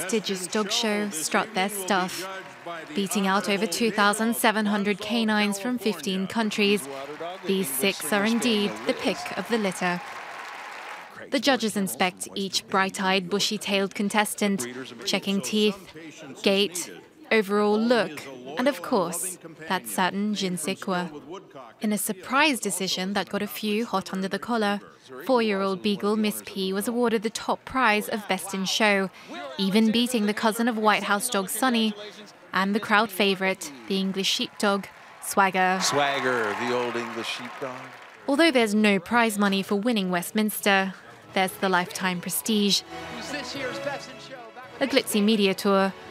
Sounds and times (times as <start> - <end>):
Speech: 0.0 - 10.0, 11.2 - 46.0.